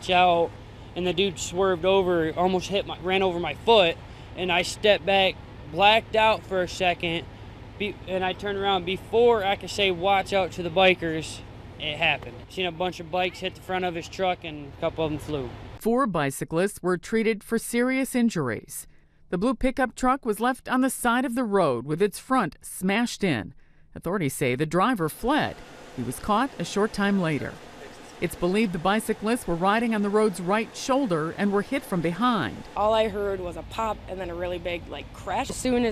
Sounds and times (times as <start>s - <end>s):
Speech: 0.0s - 7.2s, 7.8s - 18.8s, 19.4s - 27.6s, 28.2s - 35.9s.